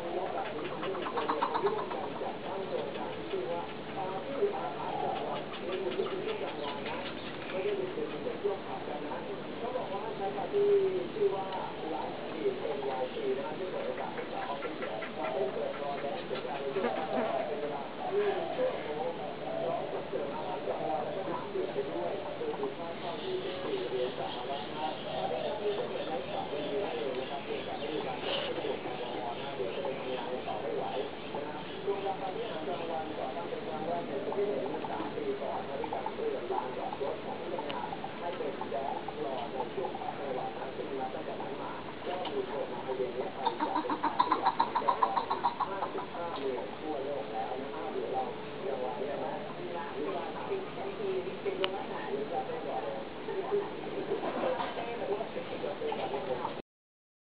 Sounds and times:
Bird: 0:00.0 - 0:08.9, 0:09.8 - 0:48.3
Speech: 0:00.0 - 0:56.6.

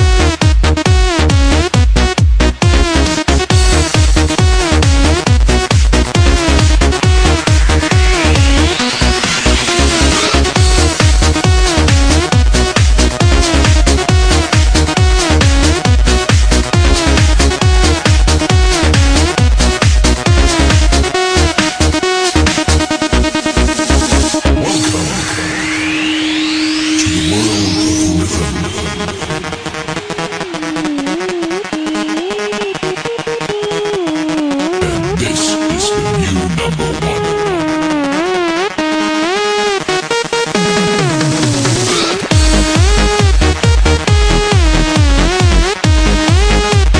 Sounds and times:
Techno: 0:00.0 - 0:46.9.

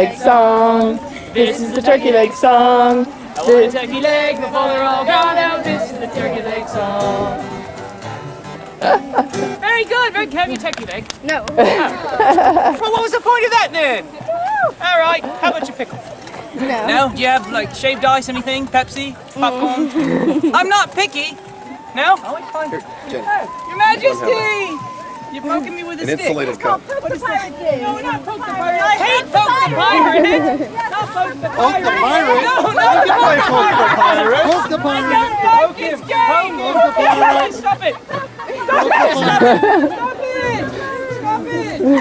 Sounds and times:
Music: 0:03.1 - 0:09.8, 0:23.5 - 0:42.0.

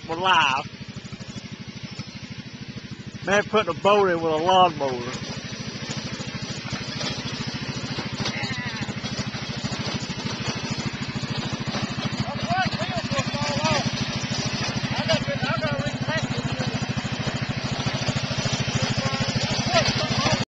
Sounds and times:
Speech: 0:00.0 - 0:00.7, 0:03.3 - 0:05.2, 0:08.3 - 0:09.0, 0:12.2 - 0:13.8, 0:15.0 - 0:16.8, 0:18.8 - 0:20.4
Vehicle: 0:00.0 - 0:20.4.

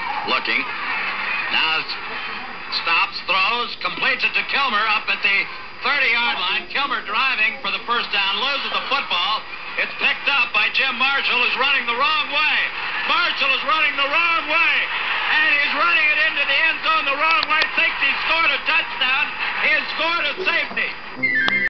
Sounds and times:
Speech: 0:01.5 - 0:21.0.

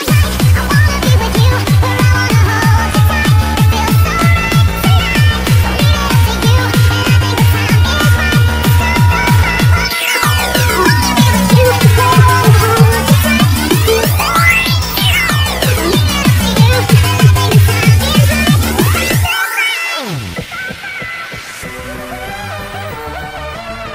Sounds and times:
Music: 0:00.0 - 0:23.9.

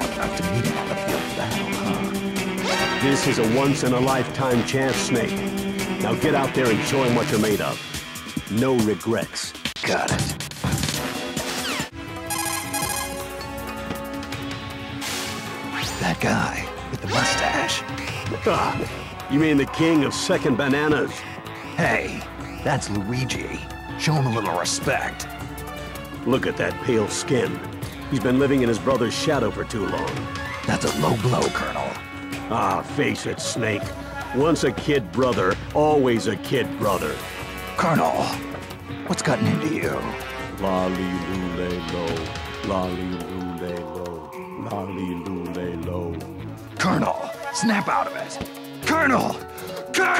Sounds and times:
Music: 0:00.0 - 0:50.1
Speech: 0:03.0 - 0:05.4, 0:06.0 - 0:07.8, 0:08.5 - 0:10.2, 0:15.9 - 0:21.2, 0:21.8 - 0:25.2, 0:26.2 - 0:37.2, 0:37.8 - 0:38.4, 0:39.0 - 0:49.4.

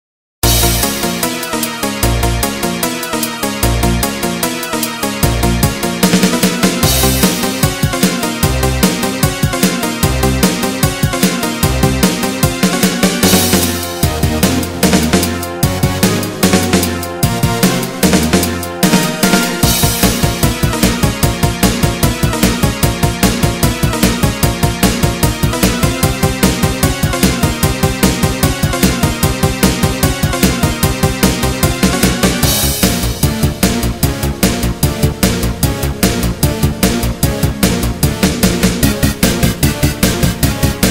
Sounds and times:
Music: 0:00.4 - 0:40.9.

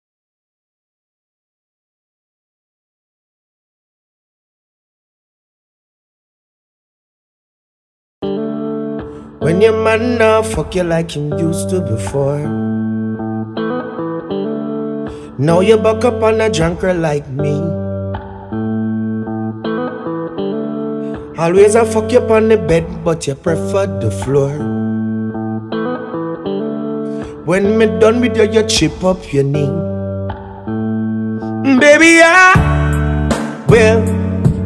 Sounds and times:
Music: 0:08.2 - 0:34.6.

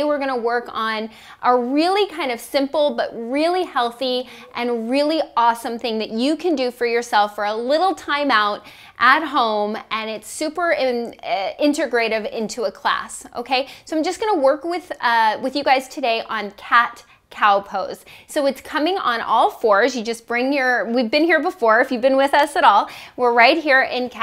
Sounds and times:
Speech: 0:00.0 - 0:24.2.

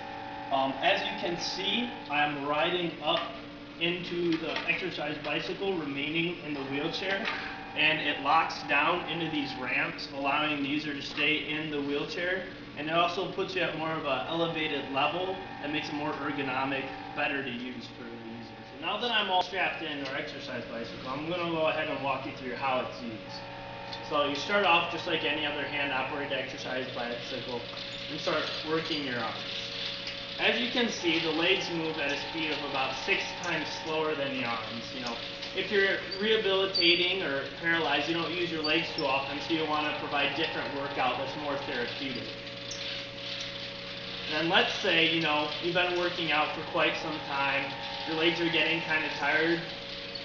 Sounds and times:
Speech: 0:00.6 - 0:23.4, 0:24.1 - 0:29.4, 0:30.4 - 0:42.4, 0:44.3 - 0:49.7.

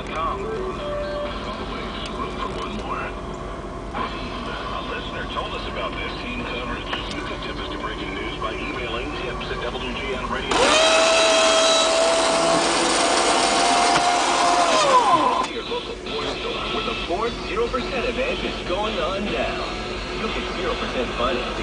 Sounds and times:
Speech: 0:00.0 - 0:03.2, 0:04.0 - 0:10.6, 0:15.4 - 0:21.6
Car: 0:00.0 - 0:21.6.

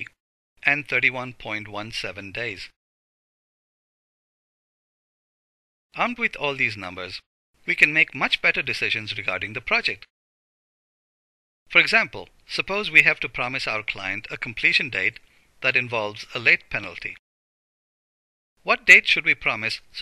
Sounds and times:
Speech: 0:00.0 - 0:02.8, 0:06.0 - 0:10.1, 0:11.7 - 0:17.2, 0:18.6 - 0:20.0.

